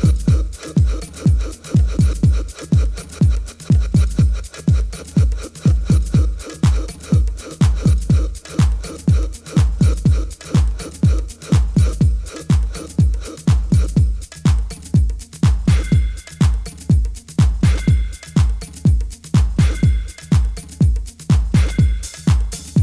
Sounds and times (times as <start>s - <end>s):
Music: 0.0s - 22.8s.